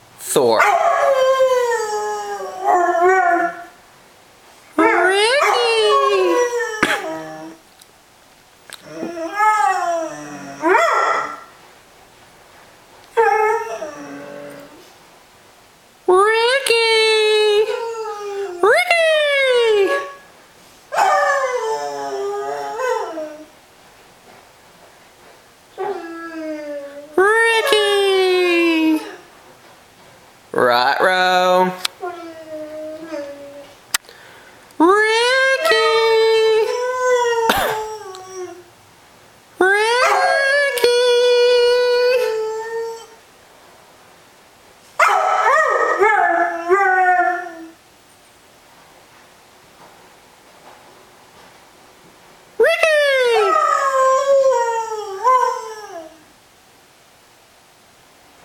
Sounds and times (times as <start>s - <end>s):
Speech: 0.2s - 0.8s, 4.8s - 7.5s, 16.1s - 20.2s, 27.2s - 29.2s, 30.6s - 31.9s, 34.8s - 37.0s, 39.6s - 42.5s, 52.6s - 54.3s.